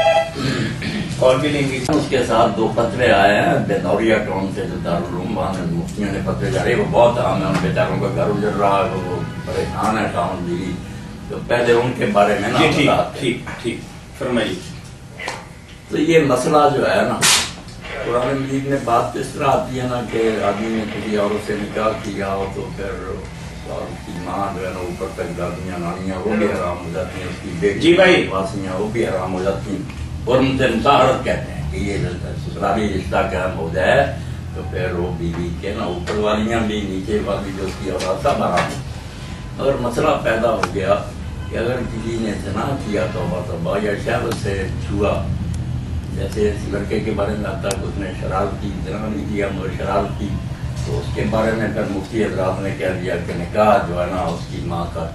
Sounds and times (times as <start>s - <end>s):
Speech: 0.4s - 14.8s, 15.9s - 38.9s, 39.6s - 45.3s, 46.1s - 55.1s.